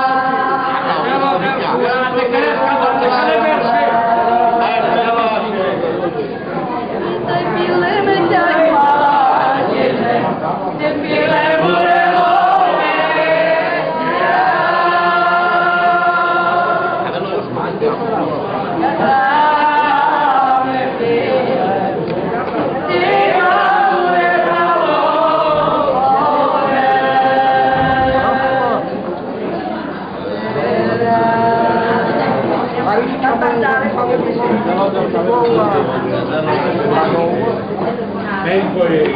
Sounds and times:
Chant: 0:00.0 - 0:39.1.

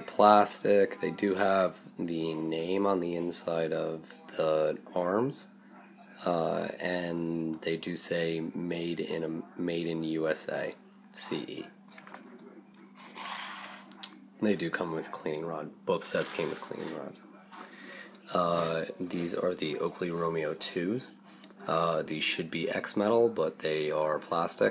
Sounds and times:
Speech: 0:00.0 - 0:12.7, 0:14.0 - 0:24.7.

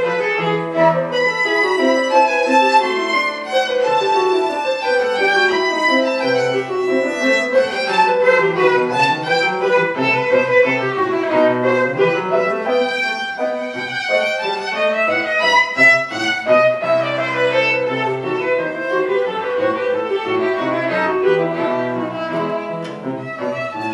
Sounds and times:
Violin, fiddle: 0:00.0 - 0:23.9.

